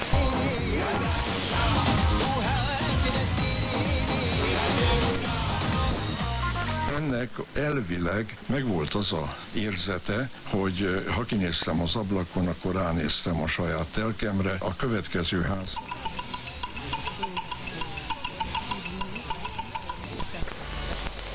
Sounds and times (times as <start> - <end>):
Music: 0.0 - 7.1, 15.8 - 21.3
Radio: 0.0 - 21.3
Speech: 6.9 - 15.8.